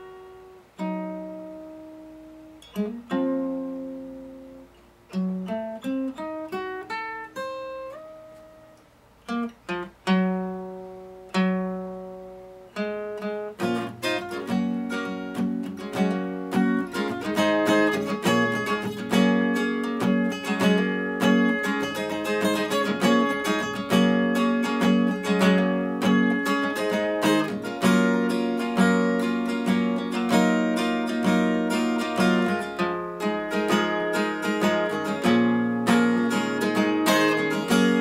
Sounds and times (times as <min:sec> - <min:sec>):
Acoustic guitar: 0:00.0 - 0:38.0.